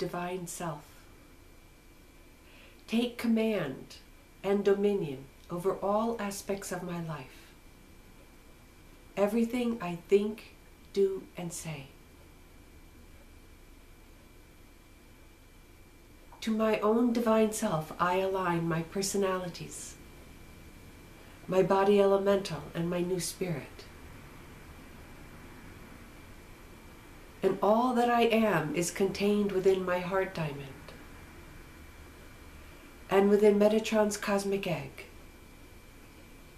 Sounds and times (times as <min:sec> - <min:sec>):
Speech: 0:00.0 - 0:00.9, 0:02.9 - 0:07.5, 0:09.2 - 0:12.0, 0:16.4 - 0:20.0, 0:21.5 - 0:23.9, 0:27.4 - 0:31.0, 0:33.1 - 0:35.2.